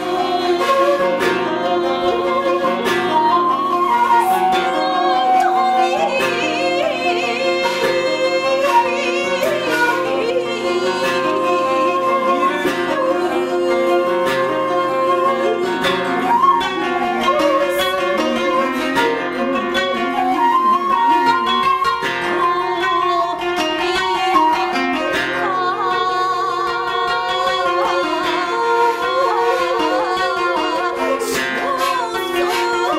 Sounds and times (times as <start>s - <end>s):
Musical instrument: 0.0s - 32.9s.